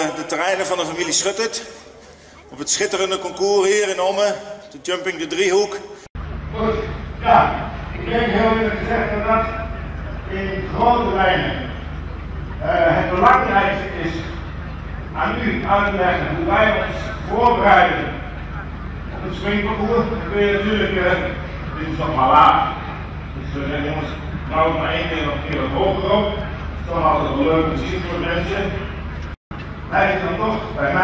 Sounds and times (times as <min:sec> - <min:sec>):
Speech: 0:00.0 - 0:05.9, 0:06.5 - 0:11.8, 0:12.6 - 0:28.9, 0:29.9 - 0:31.0.